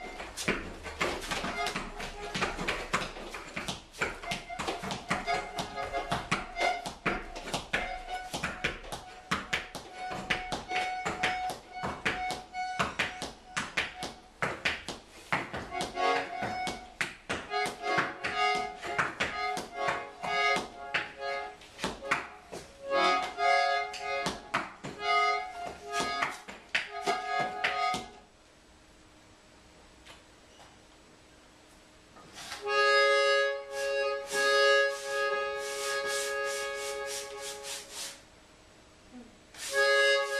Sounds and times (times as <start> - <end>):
Accordion: 0.0 - 14.7, 15.4 - 28.2, 32.5 - 38.2, 39.6 - 40.3
Inside, small room: 0.0 - 40.3.